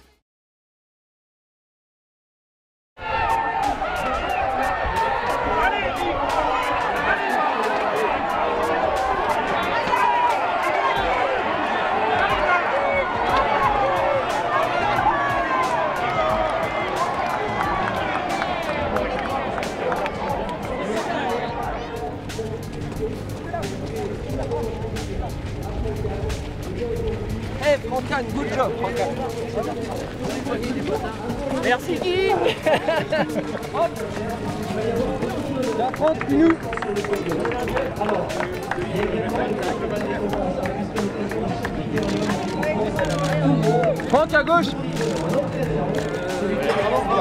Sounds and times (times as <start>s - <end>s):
Music: 3.0s - 47.2s
Speech: 18.9s - 47.2s.